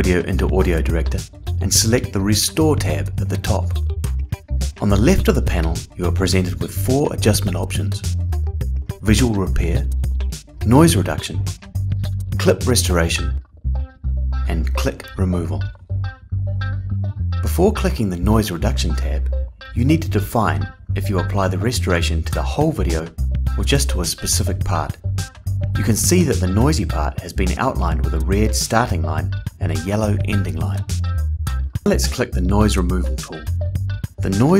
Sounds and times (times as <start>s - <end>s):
Speech: 0.0s - 3.8s, 4.8s - 8.1s, 9.0s - 9.9s, 10.6s - 11.5s, 12.4s - 13.4s, 14.5s - 15.7s, 17.5s - 25.0s, 25.8s - 30.9s, 31.8s - 33.5s, 34.2s - 34.5s
Music: 0.0s - 34.5s.